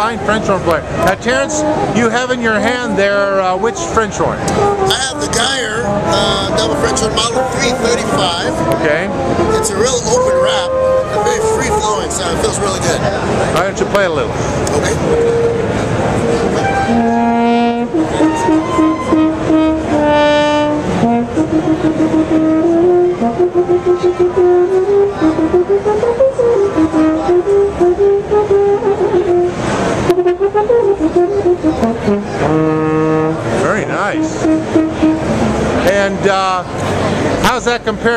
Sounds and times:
Music: 0:00.0 - 0:14.2, 0:14.8 - 0:38.1
Speech: 0:04.9 - 0:15.0.

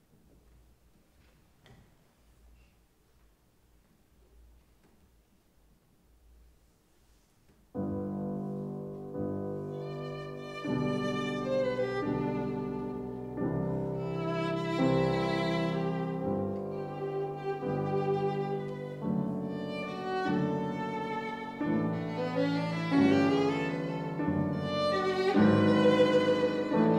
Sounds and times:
Violin, fiddle: 0:09.7 - 0:26.9.

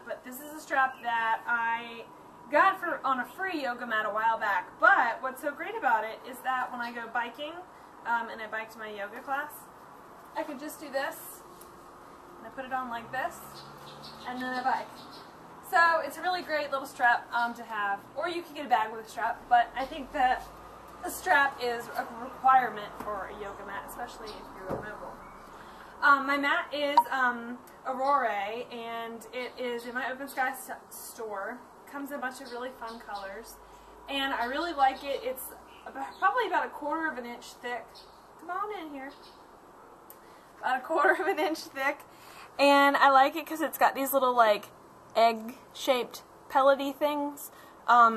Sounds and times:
Speech: 0:00.0 - 0:09.7, 0:10.4 - 0:11.4, 0:12.4 - 0:13.5, 0:14.3 - 0:14.9, 0:15.7 - 0:25.2, 0:26.0 - 0:39.2, 0:40.6 - 0:42.0, 0:42.6 - 0:48.1.

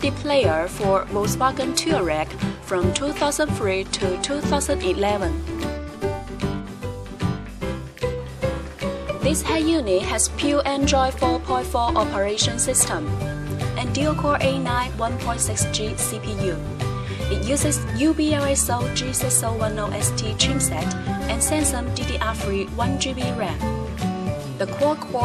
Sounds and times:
Speech: 0:00.0 - 0:05.4, 0:09.2 - 0:13.1, 0:13.8 - 0:23.7, 0:24.6 - 0:25.2
Music: 0:00.0 - 0:25.2.

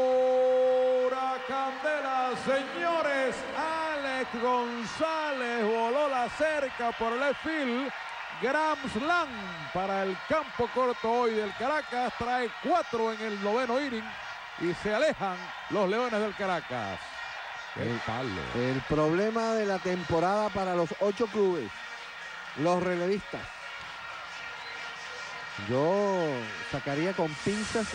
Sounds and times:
Speech: 0:00.0 - 0:17.0, 0:17.8 - 0:21.7, 0:22.6 - 0:23.5, 0:25.6 - 0:27.9
Music: 0:01.2 - 0:27.9.

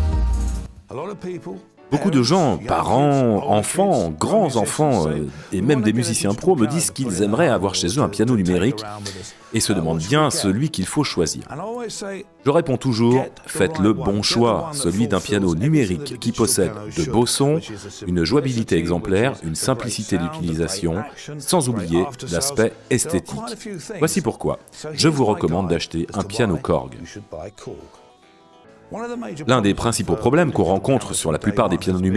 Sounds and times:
Music: 0:00.0 - 0:32.1
Speech: 0:00.9 - 0:28.0, 0:28.9 - 0:32.1.

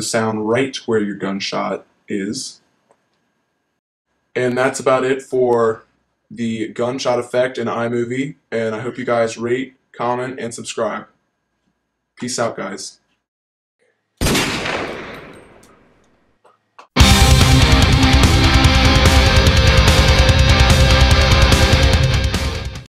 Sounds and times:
Gunshot, gunfire: 0:14.2 - 0:15.8
Music: 0:17.0 - 0:22.9.

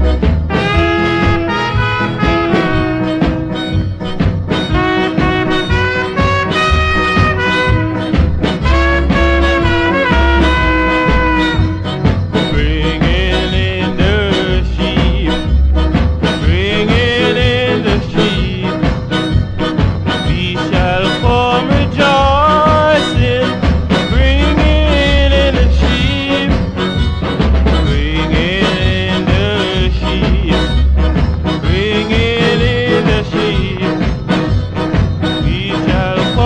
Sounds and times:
Music: 0:00.0 - 0:36.4.

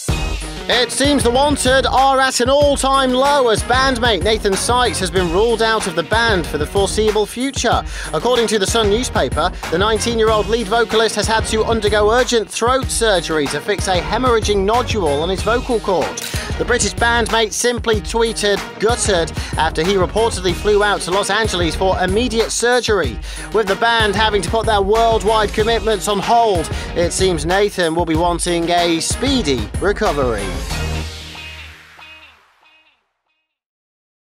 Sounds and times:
Music: 0:00.0 - 0:33.6
Speech: 0:00.7 - 0:30.6.

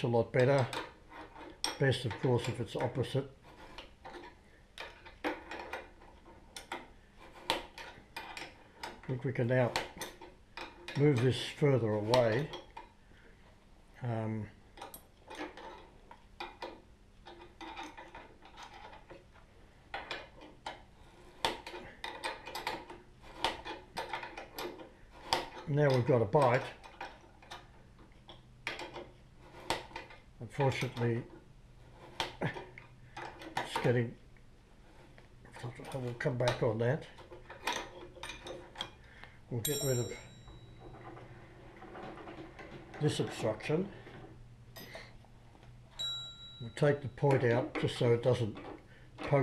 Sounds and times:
Speech: 0:00.0 - 0:00.8, 0:01.8 - 0:03.4, 0:09.1 - 0:09.8, 0:11.0 - 0:12.5, 0:14.0 - 0:14.6, 0:25.7 - 0:26.8, 0:30.4 - 0:31.3, 0:33.6 - 0:34.2, 0:35.5 - 0:37.2, 0:39.5 - 0:40.3, 0:43.0 - 0:44.0, 0:46.6 - 0:49.4
Tools: 0:00.0 - 0:13.0, 0:14.8 - 0:34.1, 0:34.9 - 0:45.0, 0:45.9 - 0:49.4.

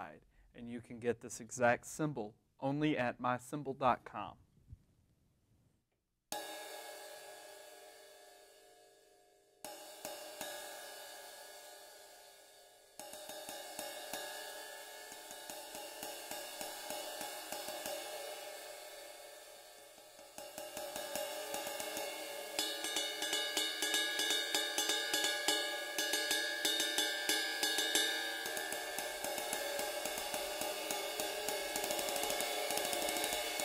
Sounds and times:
Cymbal: 0:06.4 - 0:33.6.

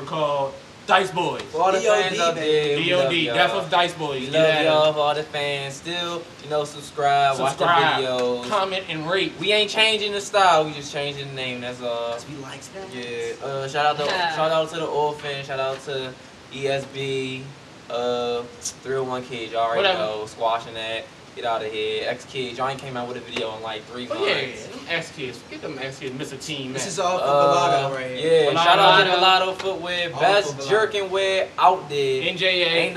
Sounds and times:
Speech: 0:00.0 - 0:32.9.

